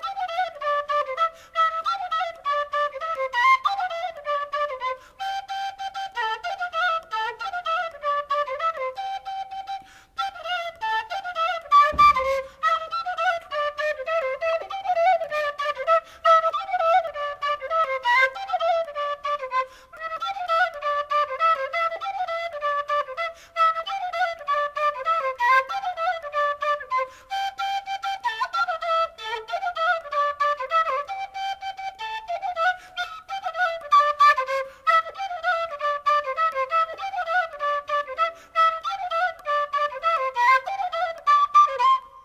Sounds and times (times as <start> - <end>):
Music: 0.0 - 42.2.